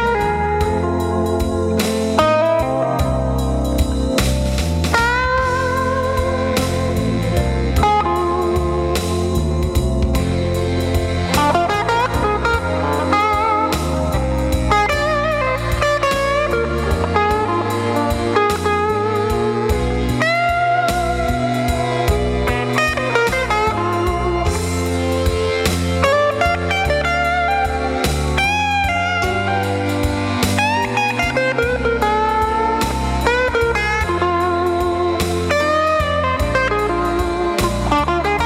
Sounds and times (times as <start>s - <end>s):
Music: 0.0s - 38.4s.